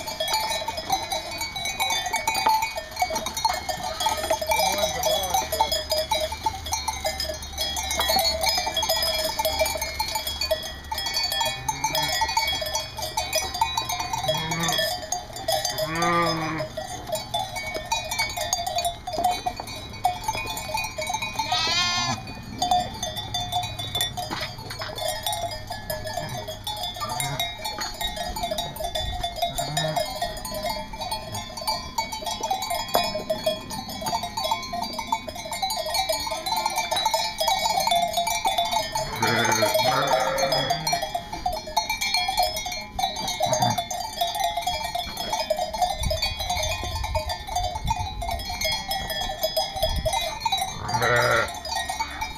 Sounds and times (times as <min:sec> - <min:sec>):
Bleat: 0:14.2 - 0:14.8, 0:15.9 - 0:16.7, 0:21.5 - 0:22.2, 0:39.1 - 0:40.9, 0:50.8 - 0:51.6.